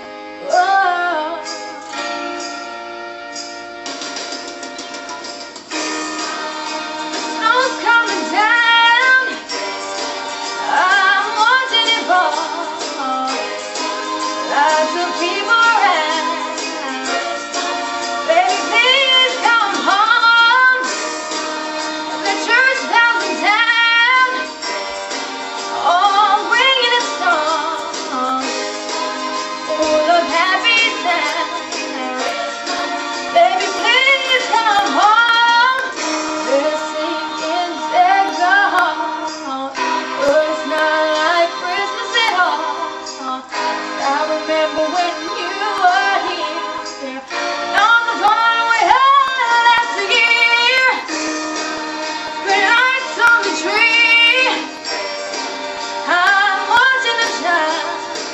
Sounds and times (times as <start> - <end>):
Music: 0.0 - 58.3
Female singing: 0.4 - 1.5, 6.5 - 9.4, 10.6 - 13.6, 14.4 - 17.7, 18.3 - 20.9, 22.2 - 24.5, 25.8 - 28.6, 29.7 - 32.7, 33.3 - 35.9, 36.5 - 51.1, 52.4 - 54.7, 56.1 - 58.0.